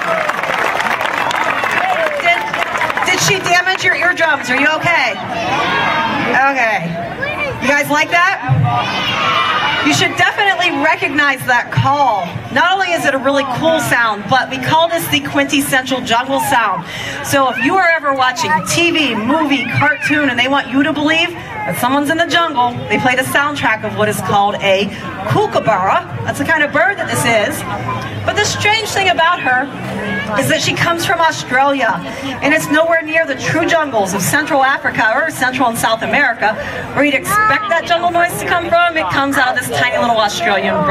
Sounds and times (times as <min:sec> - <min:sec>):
Cheering: 0:00.0 - 0:06.4, 0:08.4 - 0:10.5
Crowd: 0:00.0 - 0:40.9.